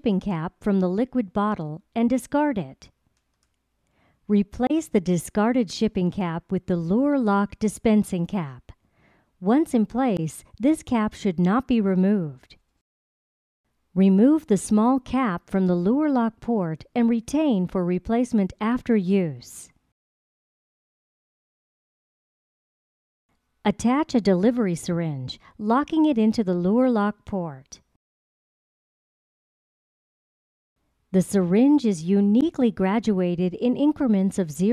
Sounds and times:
Speech: 0.0s - 2.9s, 4.3s - 8.7s, 9.4s - 12.6s, 14.0s - 19.8s, 23.7s - 27.8s, 31.2s - 34.7s.

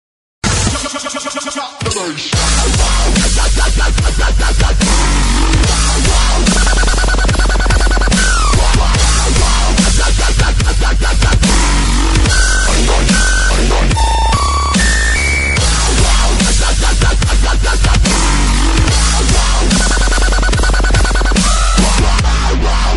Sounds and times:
Dubstep: 0.4s - 22.9s.

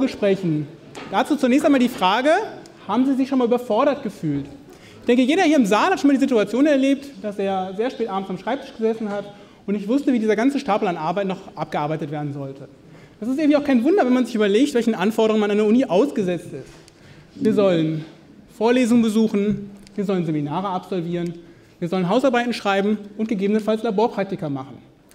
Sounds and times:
Speech: 0.0s - 16.7s, 17.4s - 24.9s.

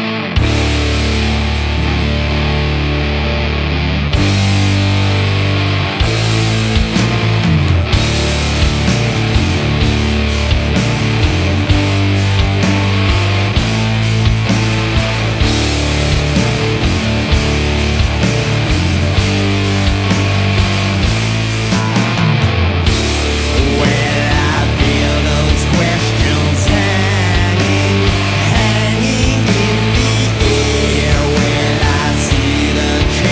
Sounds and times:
Music: 0.0s - 33.3s.

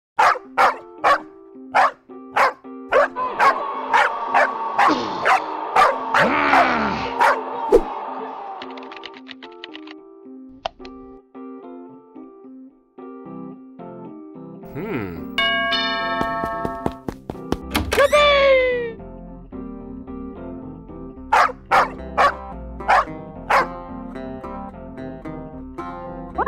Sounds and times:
Bark: 0.2s - 7.4s, 21.3s - 23.7s
Music: 0.2s - 26.4s.

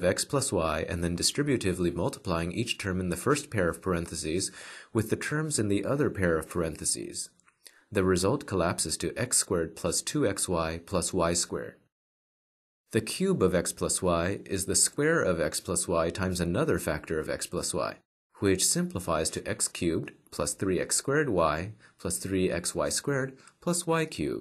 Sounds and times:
Speech synthesizer: 0.0s - 7.3s, 8.0s - 11.8s, 13.0s - 24.4s.

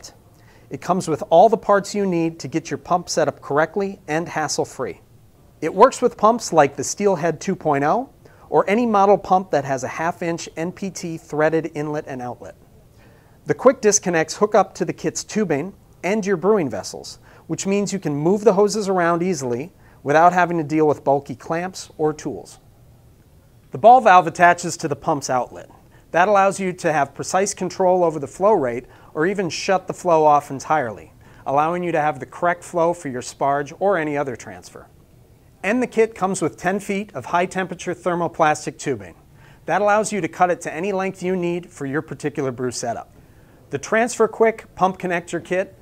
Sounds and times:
Speech: 0.0s - 5.0s, 5.6s - 12.7s, 13.5s - 22.6s, 23.7s - 34.9s, 35.6s - 45.8s.

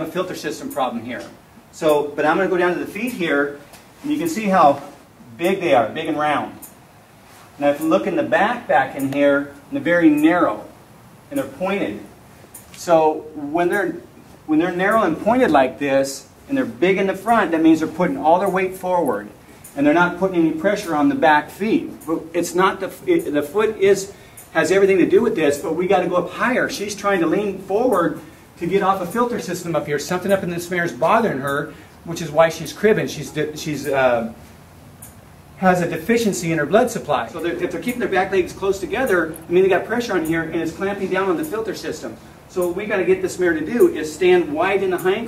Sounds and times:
Speech: 0.0s - 6.7s, 7.6s - 12.1s, 12.8s - 34.4s, 35.6s - 45.2s.

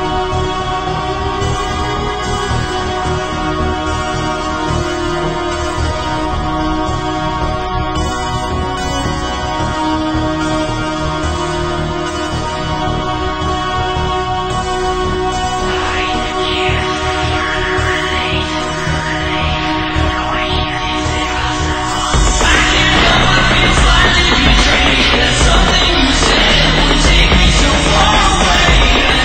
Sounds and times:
Music: 0.0s - 29.2s.

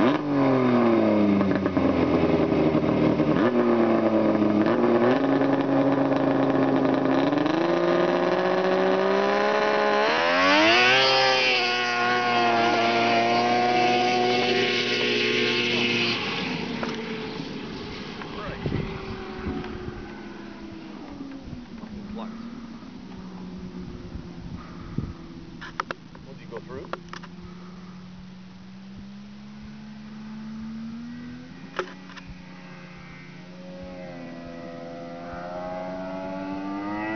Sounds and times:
Vehicle: 0.0s - 37.1s.

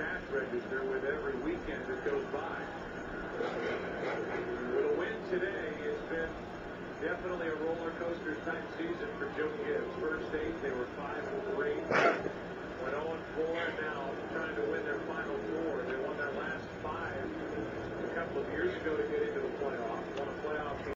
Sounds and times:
Speech: 0.0s - 2.9s, 4.3s - 6.4s, 7.0s - 20.9s.

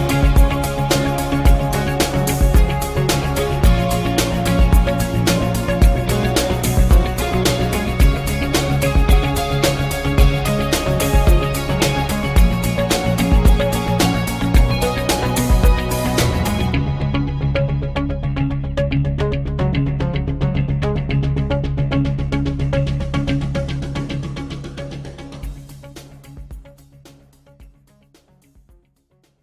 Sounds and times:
Music: 0.0s - 29.4s.

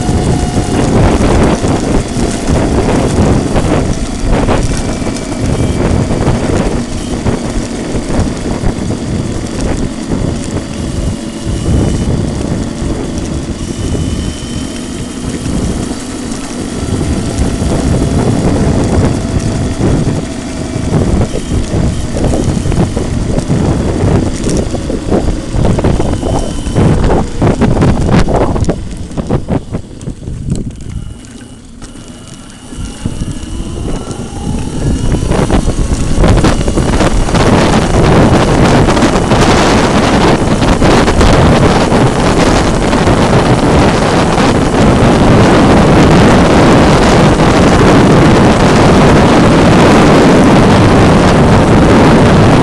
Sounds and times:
Vehicle: 0.0s - 52.6s.

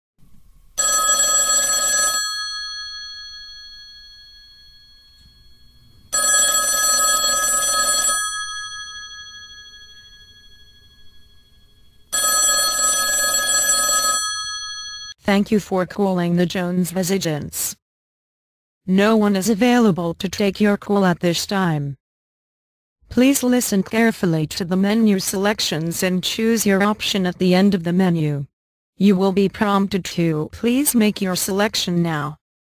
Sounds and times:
Telephone bell ringing: 0.8s - 15.2s.

